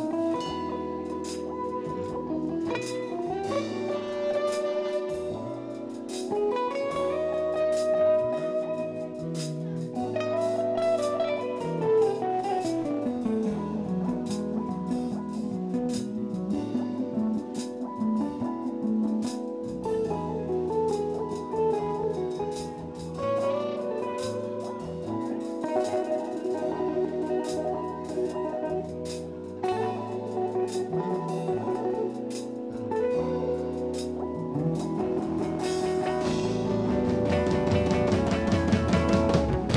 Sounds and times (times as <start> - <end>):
Acoustic guitar: 0.0 - 39.7
Strum: 0.0 - 39.7.